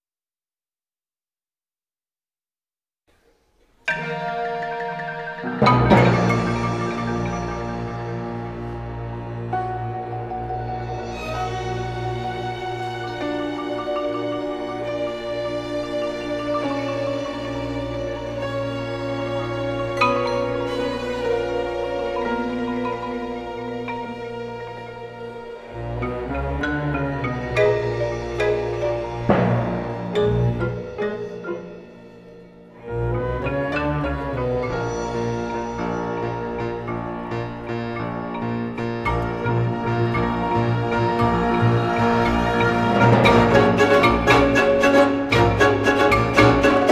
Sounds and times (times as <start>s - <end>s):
Glockenspiel: 3.8s - 46.9s
Marimba, xylophone: 3.8s - 46.9s.